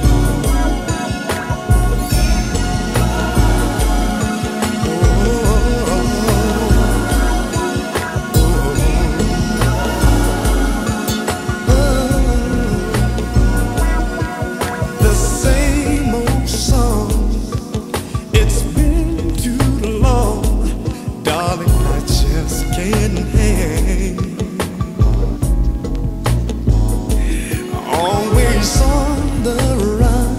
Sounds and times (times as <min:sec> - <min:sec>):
Music: 0:00.0 - 0:30.3.